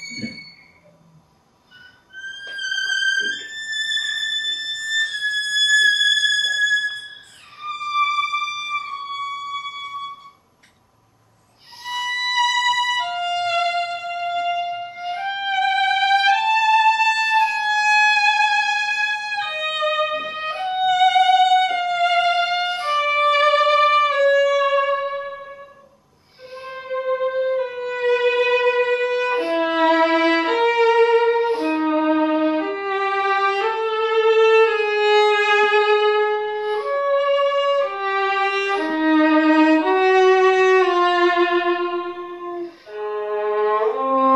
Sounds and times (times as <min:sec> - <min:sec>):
Violin, fiddle: 0:00.0 - 0:00.8, 0:01.7 - 0:10.4, 0:11.6 - 0:44.3.